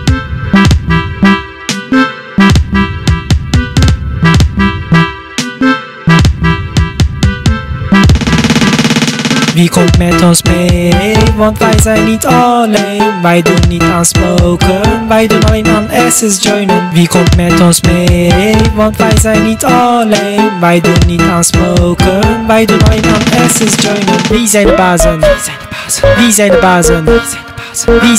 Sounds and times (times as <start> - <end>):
Music: 0.0 - 28.1.